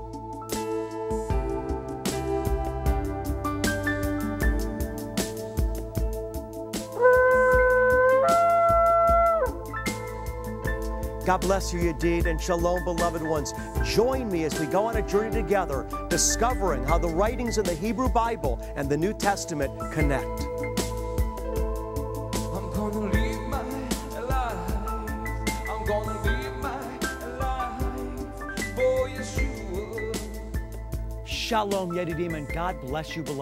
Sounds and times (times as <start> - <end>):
Music: 0.0 - 33.4
Speech: 11.3 - 20.5, 31.3 - 33.4.